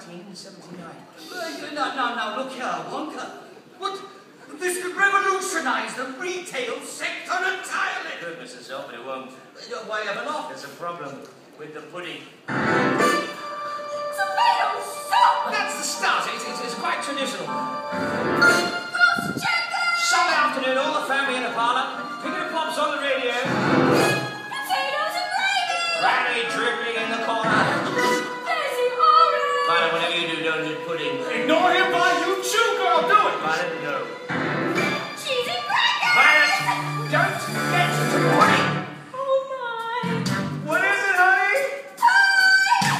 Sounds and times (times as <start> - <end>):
Music: 12.5 - 39.1, 39.7 - 42.9.